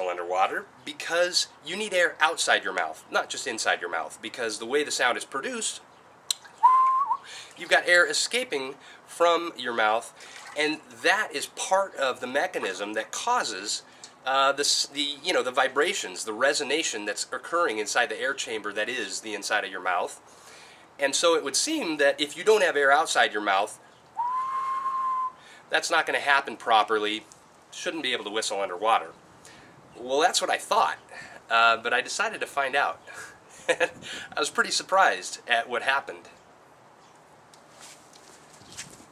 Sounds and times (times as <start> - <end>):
Whistling: 6.6 - 7.3, 24.2 - 25.4.